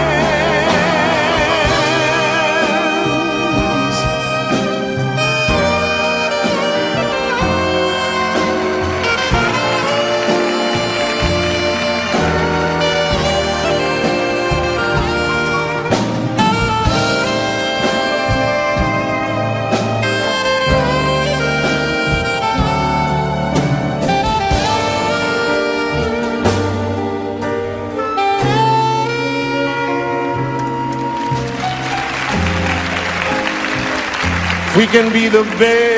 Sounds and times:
Orchestra: 0.0s - 35.9s.

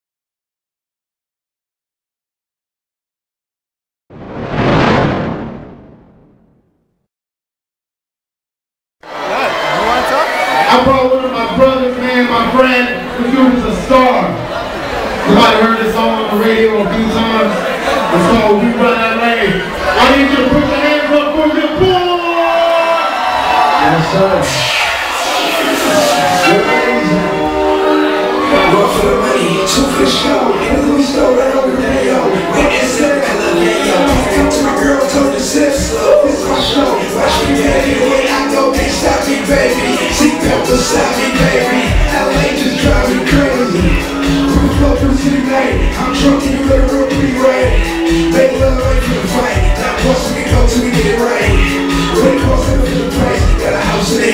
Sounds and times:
Music: 24.7s - 54.3s.

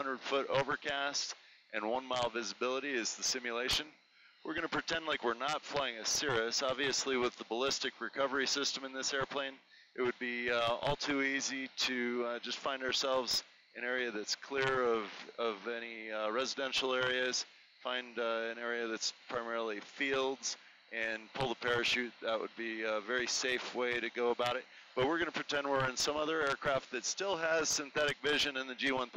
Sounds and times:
Speech: 0.0s - 29.1s.

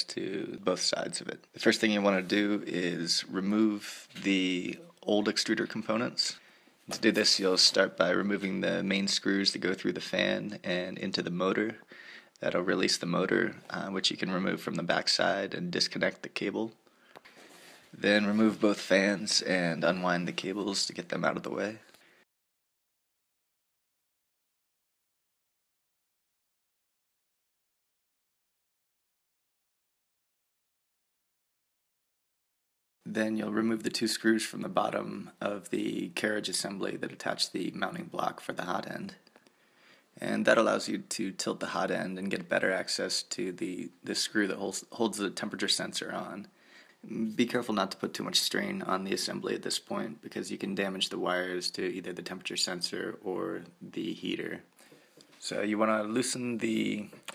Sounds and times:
Speech: 0.0s - 16.8s, 17.9s - 21.9s, 33.0s - 39.3s, 40.2s - 54.7s, 55.4s - 57.3s.

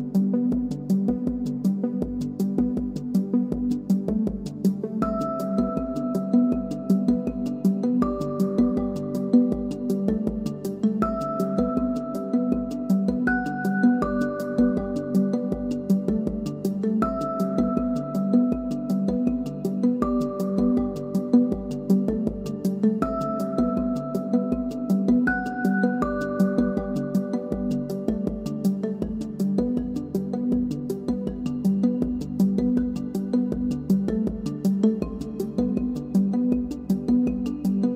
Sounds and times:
Music: 0.0s - 37.9s.

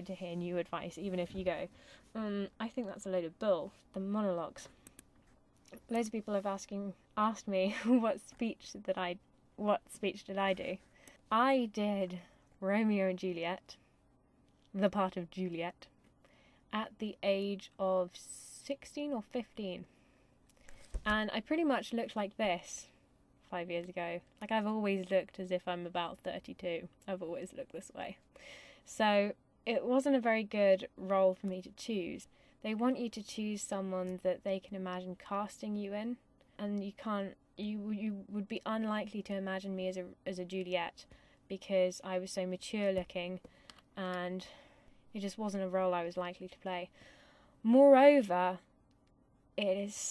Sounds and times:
Narration, monologue: 0.0s - 50.1s.

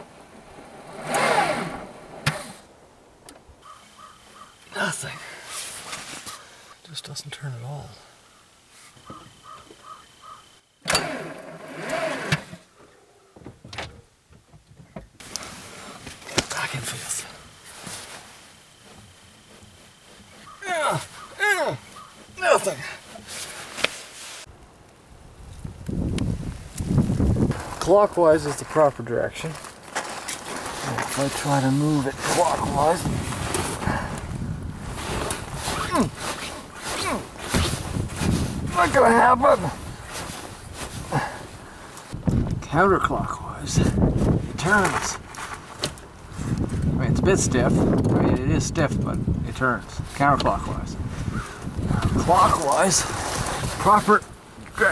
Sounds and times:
Speech: 6.8s - 8.1s, 16.3s - 17.4s, 20.6s - 21.8s, 22.4s - 23.0s, 27.8s - 29.6s, 30.8s - 33.0s, 38.7s - 39.8s, 42.6s - 44.0s, 44.6s - 45.2s, 47.0s - 51.0s, 52.0s - 53.1s, 53.8s - 54.9s.

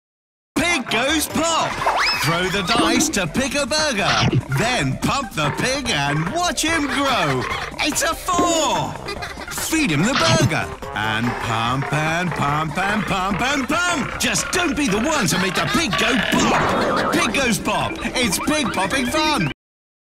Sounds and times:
Speech: 0.6s - 9.0s, 9.6s - 19.6s
Music: 0.6s - 19.6s.

